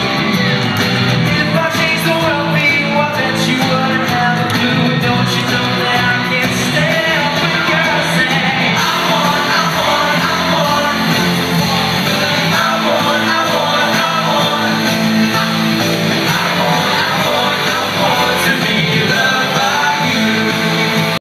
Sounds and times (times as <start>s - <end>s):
Music: 0.0s - 21.2s.